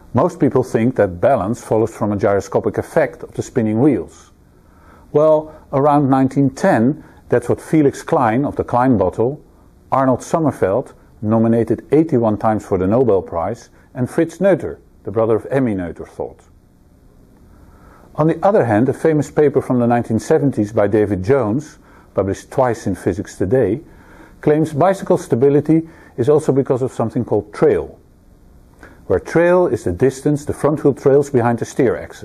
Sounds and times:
Speech: 0:00.1 - 0:04.4, 0:05.1 - 0:16.5, 0:18.2 - 0:28.0, 0:29.0 - 0:32.2.

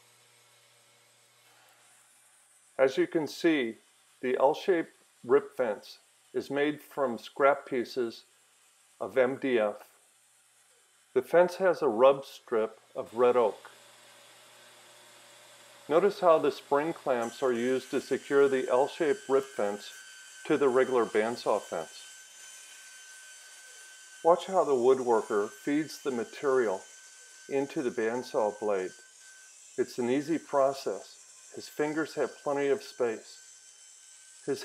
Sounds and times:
Speech: 0:02.8 - 0:08.3, 0:09.0 - 0:09.9, 0:11.2 - 0:13.7, 0:15.9 - 0:22.1, 0:24.3 - 0:26.8, 0:27.5 - 0:29.0, 0:29.8 - 0:33.4.

